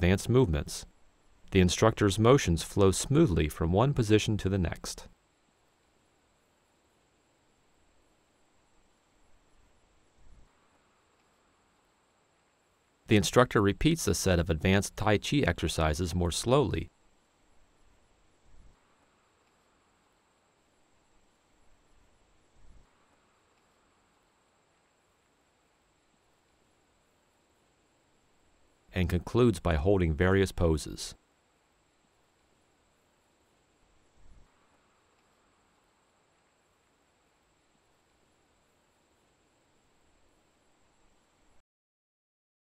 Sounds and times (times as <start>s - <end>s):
Speech: 0.0s - 0.9s, 1.5s - 5.1s, 13.1s - 16.9s, 29.0s - 31.2s
Silence: 4.7s - 41.6s.